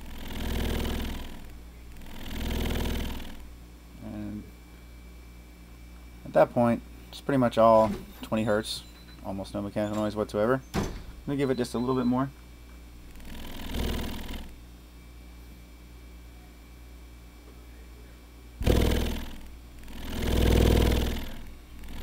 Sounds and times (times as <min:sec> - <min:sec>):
Speech: 0:04.0 - 0:04.5, 0:06.2 - 0:10.6, 0:11.3 - 0:12.4, 0:17.4 - 0:18.4.